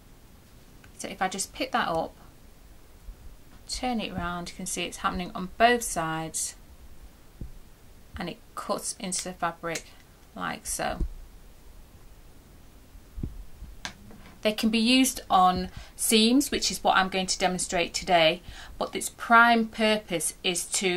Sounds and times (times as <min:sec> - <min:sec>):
Speech: 0:01.0 - 0:02.2, 0:03.7 - 0:06.6, 0:08.2 - 0:11.1, 0:14.4 - 0:20.9.